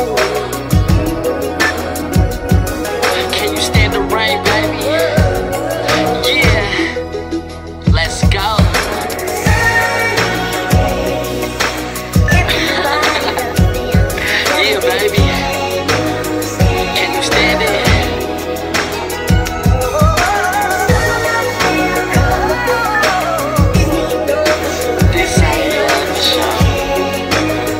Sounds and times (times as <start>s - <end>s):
Music: 0.0s - 27.7s.